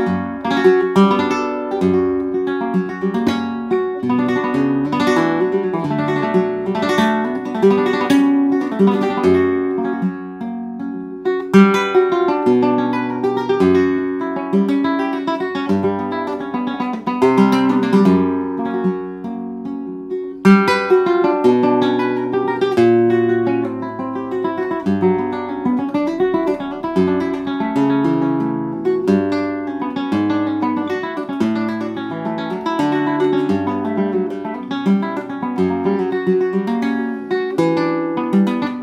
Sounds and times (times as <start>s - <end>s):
Acoustic guitar: 0.0s - 38.8s
Flamenco: 0.0s - 38.8s.